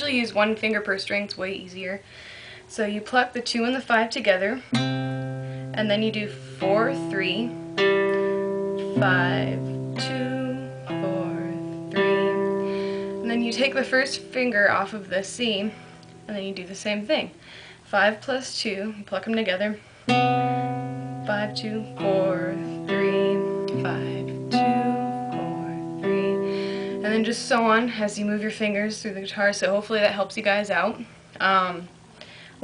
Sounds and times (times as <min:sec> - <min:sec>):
Speech: 0:00.0 - 0:02.0, 0:02.7 - 0:04.7, 0:05.8 - 0:07.5, 0:09.0 - 0:12.3, 0:13.2 - 0:19.8, 0:21.3 - 0:24.4, 0:27.0 - 0:32.0
Music: 0:04.7 - 0:16.4, 0:20.1 - 0:29.2.